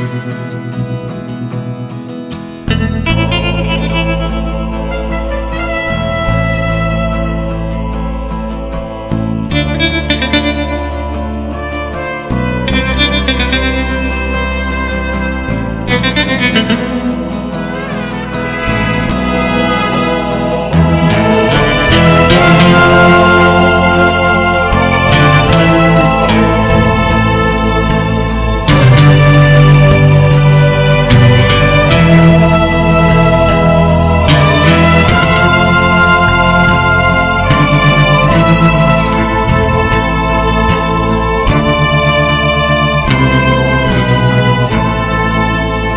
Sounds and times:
Music: 0:00.0 - 0:45.9.

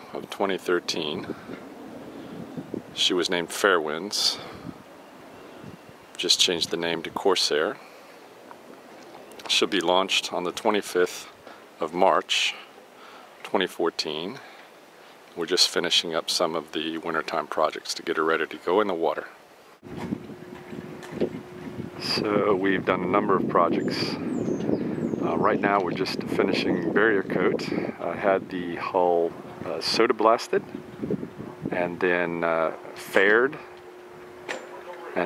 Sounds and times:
Speech: 0:00.0 - 0:01.4, 0:03.0 - 0:04.6, 0:06.2 - 0:07.8, 0:09.4 - 0:12.7, 0:13.4 - 0:14.5, 0:15.4 - 0:19.4, 0:22.0 - 0:24.2, 0:25.2 - 0:30.6, 0:31.7 - 0:33.7, 0:34.6 - 0:35.2.

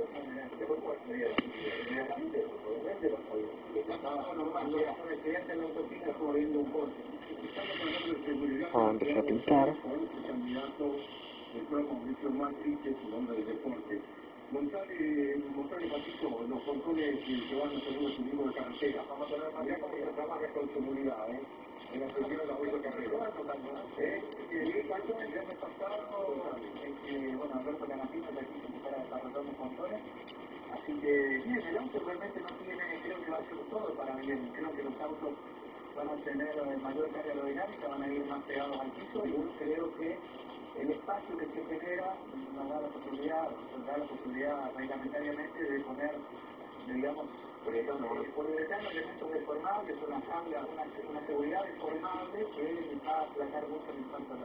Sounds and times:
Speech: 0:00.0 - 0:54.4.

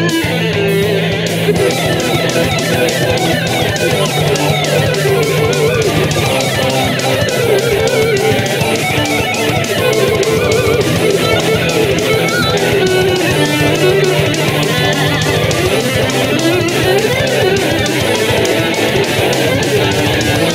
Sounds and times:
Guitar: 0:00.0 - 0:20.5.

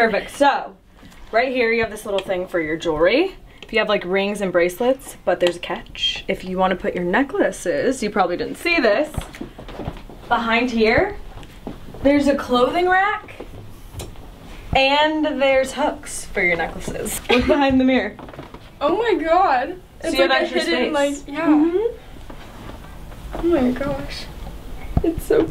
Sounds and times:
Inside, small room: 0:00.0 - 0:25.5.

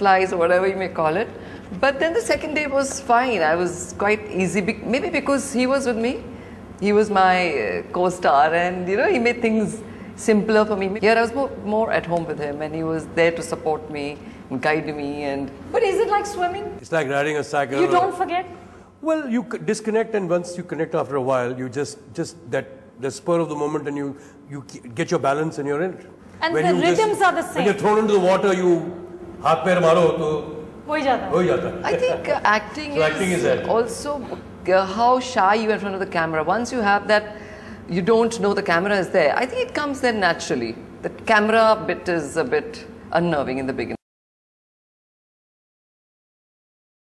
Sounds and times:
Conversation: 0:00.0 - 0:44.0.

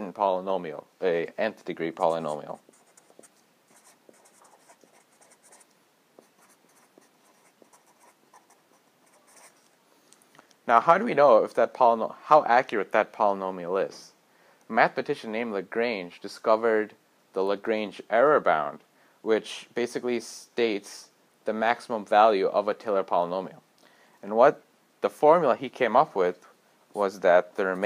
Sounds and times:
Writing: 0:01.6 - 0:09.8, 0:27.0 - 0:27.8.

